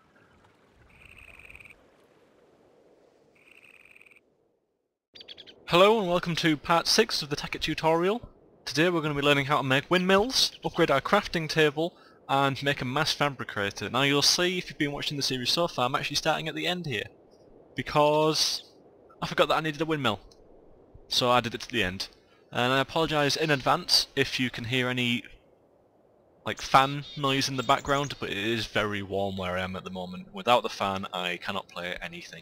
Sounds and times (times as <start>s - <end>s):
Speech: 5.7s - 17.1s, 17.8s - 20.3s, 21.1s - 25.4s, 26.5s - 32.4s.